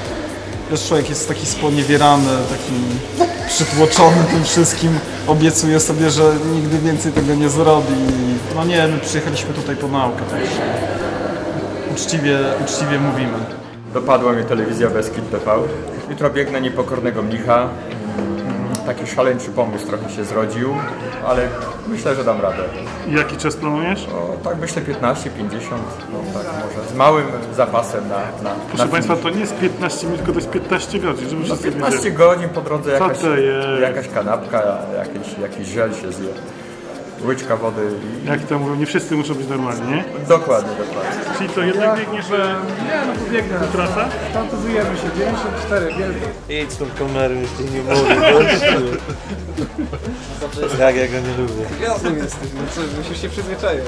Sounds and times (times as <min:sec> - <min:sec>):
Music: 0:00.0 - 0:53.8.